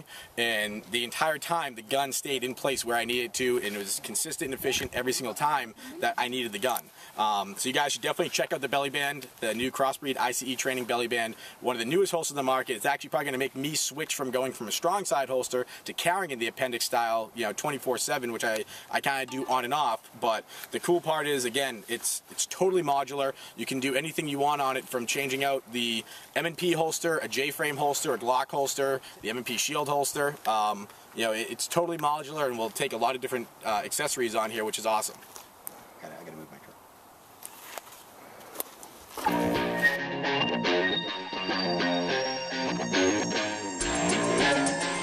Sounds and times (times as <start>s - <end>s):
Speech: 0.0s - 35.2s, 36.0s - 36.8s
Outside, rural or natural: 0.0s - 40.0s.